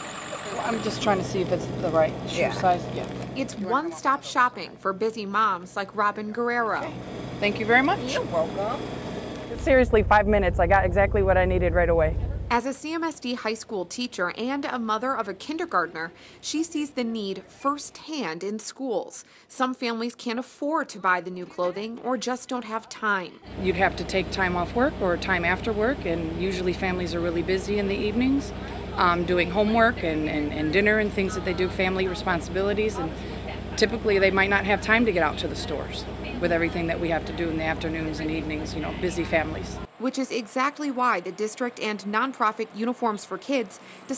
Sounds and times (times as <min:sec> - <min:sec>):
Vehicle: 0:00.0 - 0:04.8, 0:06.7 - 0:12.6, 0:23.5 - 0:40.0
Speech: 0:00.4 - 0:08.8, 0:09.6 - 0:44.1.